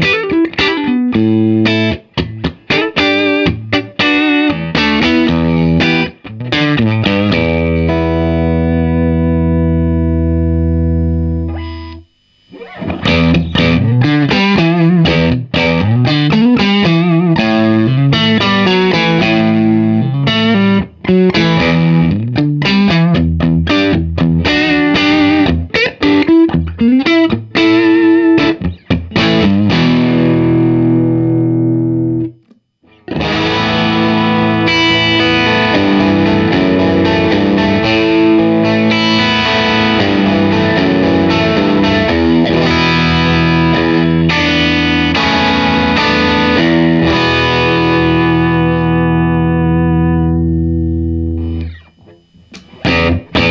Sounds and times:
Distortion: 0.0s - 53.5s
Music: 0.0s - 53.5s.

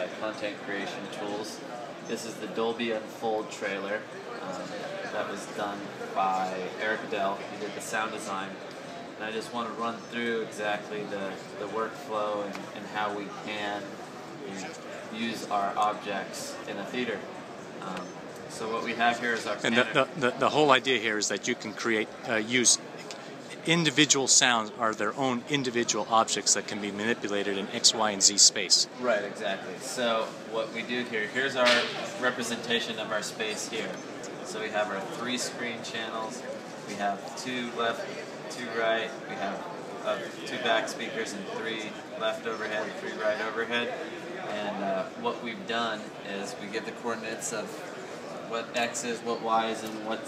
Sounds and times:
Speech: 0.0s - 8.6s, 9.2s - 22.8s, 23.5s - 50.2s.

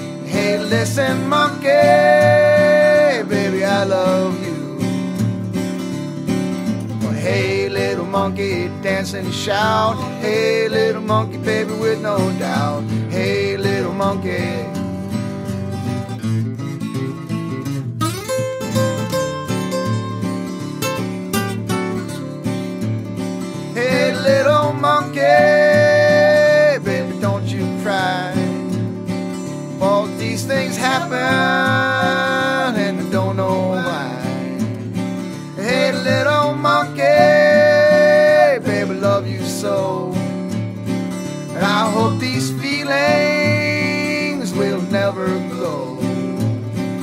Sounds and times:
Country: 0.0s - 47.0s.

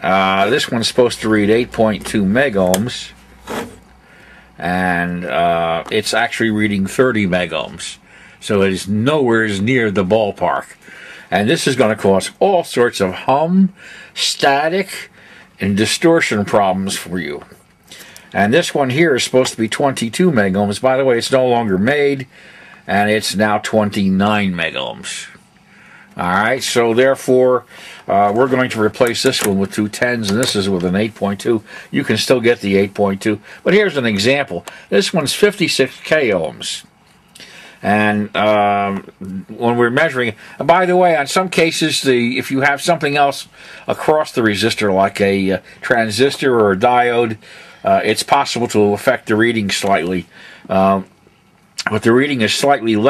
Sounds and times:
Speech: 0.0s - 3.2s, 4.6s - 17.6s, 18.3s - 22.3s, 22.9s - 25.4s, 26.2s - 36.9s, 37.8s - 51.2s, 51.8s - 53.0s.

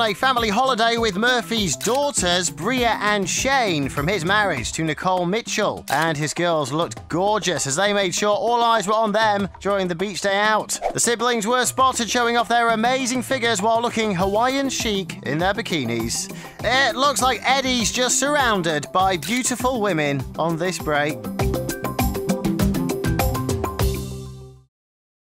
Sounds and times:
Speech: 0.0s - 21.2s
Music: 0.0s - 24.7s.

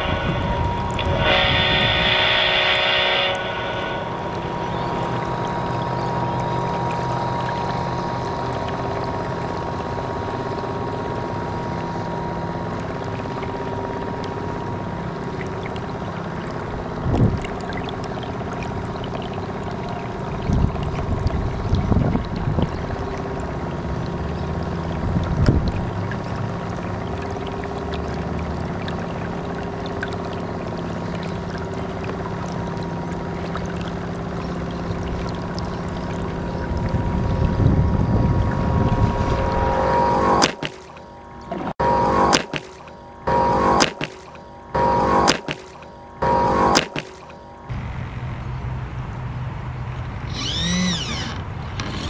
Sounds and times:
Motorboat, speedboat: 0.0s - 52.1s.

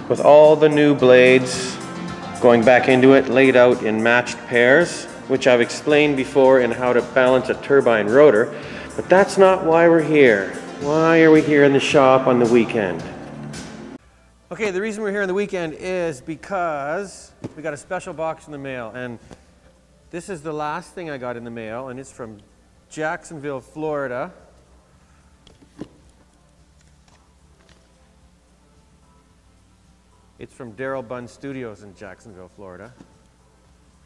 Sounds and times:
Music: 0.0s - 34.0s
Speech: 0.1s - 1.8s, 2.4s - 13.1s, 14.5s - 19.2s, 20.1s - 24.4s, 30.4s - 33.0s.

